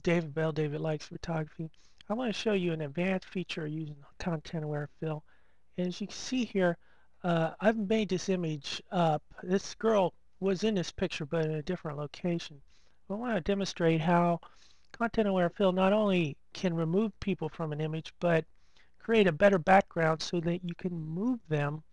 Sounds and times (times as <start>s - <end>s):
Speech: 0.0s - 21.9s.